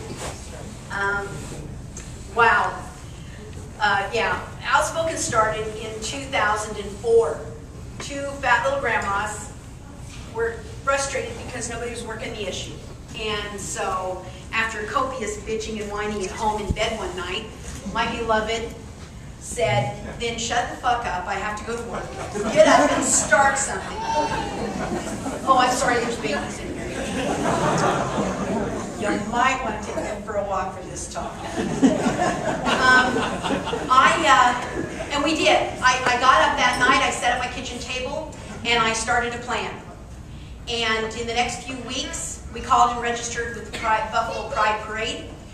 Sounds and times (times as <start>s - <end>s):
Female speech, woman speaking: 0.9s - 1.4s, 2.4s - 2.9s, 3.8s - 9.6s, 10.3s - 18.8s, 19.4s - 24.7s, 25.4s - 27.0s, 29.0s - 31.6s, 32.7s - 33.2s, 33.9s - 39.9s, 40.7s - 45.3s.